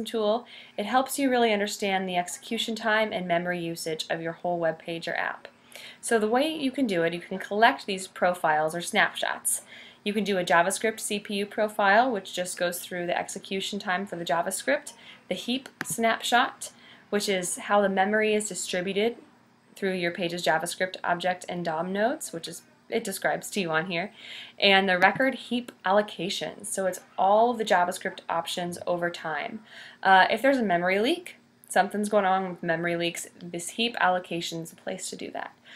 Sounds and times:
Speech: 0:00.0 - 0:35.6.

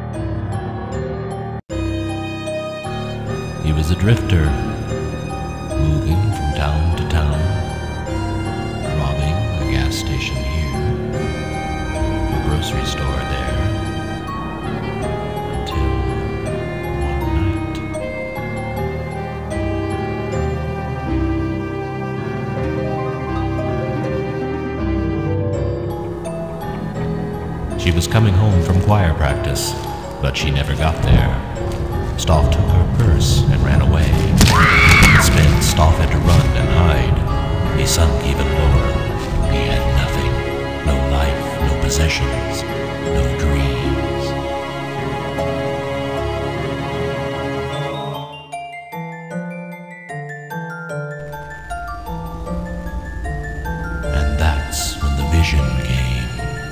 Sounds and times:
Scary music: 0:00.0 - 0:56.7
Speech: 0:03.6 - 0:04.8, 0:05.8 - 0:07.6, 0:08.9 - 0:10.9, 0:12.4 - 0:13.7, 0:17.2 - 0:17.9, 0:27.8 - 0:31.5, 0:32.2 - 0:44.4, 0:54.1 - 0:56.5.

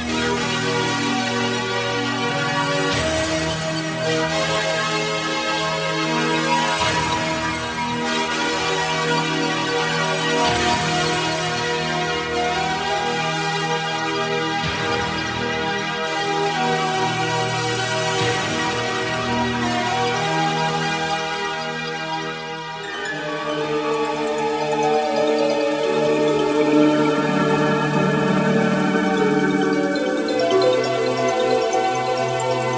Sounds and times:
Music: 0:00.0 - 0:32.7.

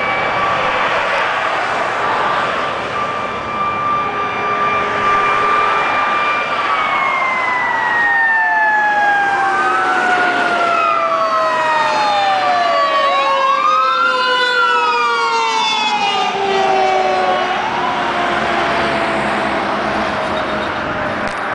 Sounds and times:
Car: 0:00.0 - 0:08.0, 0:17.3 - 0:21.5
Heavy engine (low frequency): 0:00.0 - 0:13.8, 0:14.6 - 0:21.5.

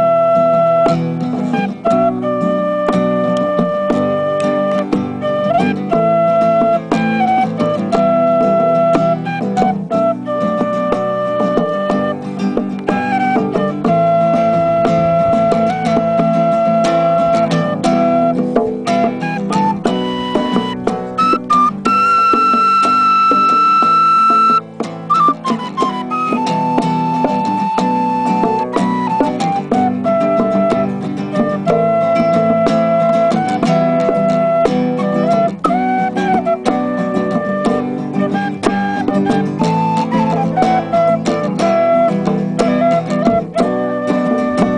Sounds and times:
Flute: 0:00.0 - 0:44.7.

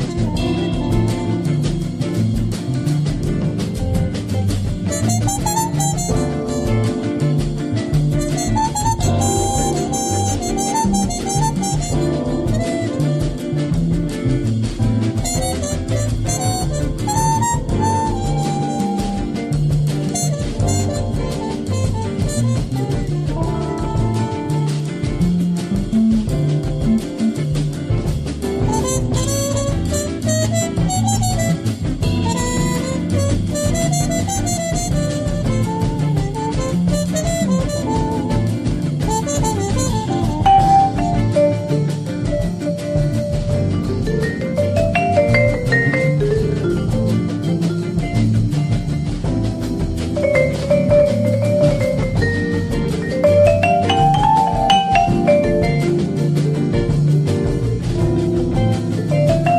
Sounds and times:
Vibraphone: 0:40.3 - 0:48.9, 0:50.2 - 0:57.1, 0:59.1 - 0:59.5.

